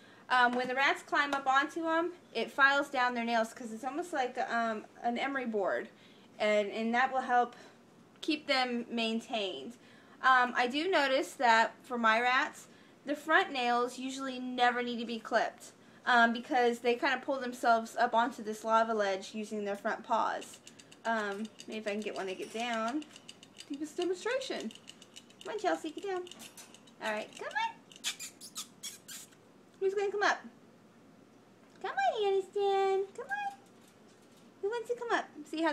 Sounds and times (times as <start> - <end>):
Speech: 0.3 - 23.1, 23.7 - 24.7, 25.4 - 26.3, 27.0 - 27.8, 29.8 - 30.5, 31.8 - 33.6, 34.6 - 35.7.